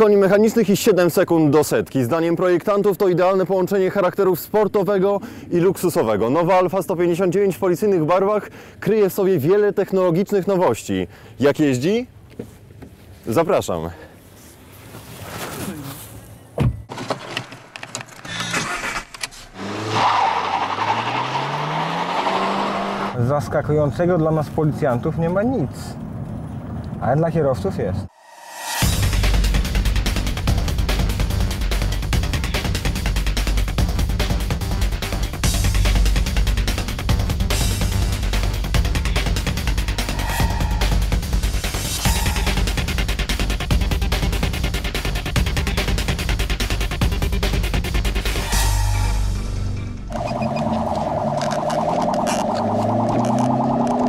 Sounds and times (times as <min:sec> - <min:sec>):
Speech: 0:00.0 - 0:12.1, 0:13.2 - 0:14.1, 0:23.2 - 0:26.0, 0:27.0 - 0:28.1
Car: 0:15.4 - 0:28.1, 0:36.2 - 0:43.4, 0:48.2 - 0:54.0.